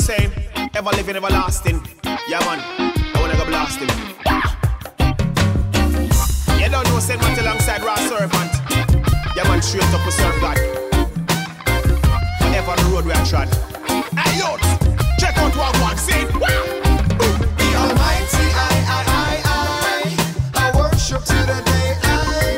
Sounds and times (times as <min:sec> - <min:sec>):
Blues: 0:00.0 - 0:22.5.